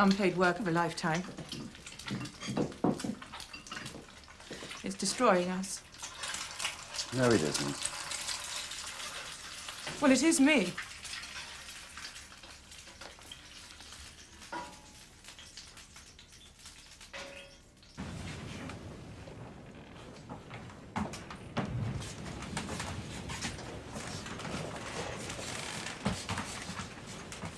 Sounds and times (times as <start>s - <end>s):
Frying (food): 0.0s - 18.0s
Sizzle: 0.0s - 18.1s.